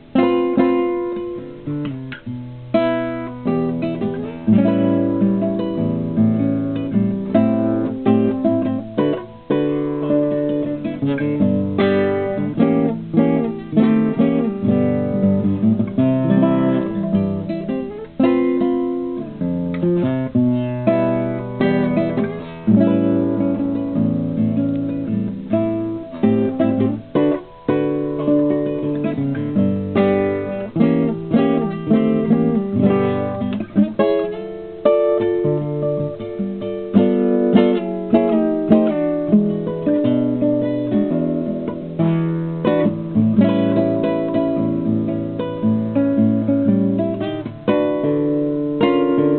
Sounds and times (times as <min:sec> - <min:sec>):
Acoustic guitar: 0:00.0 - 0:49.3.